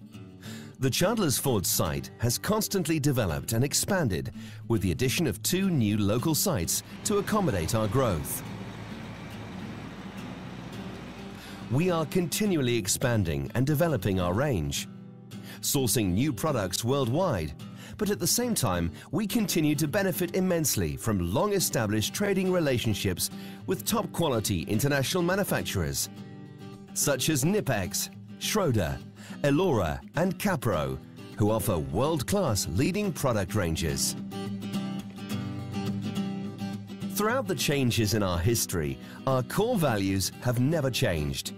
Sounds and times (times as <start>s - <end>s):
Music: 0.0s - 41.5s
Speech: 0.8s - 8.4s, 11.7s - 14.9s, 15.6s - 26.1s, 27.0s - 34.2s, 37.2s - 41.5s.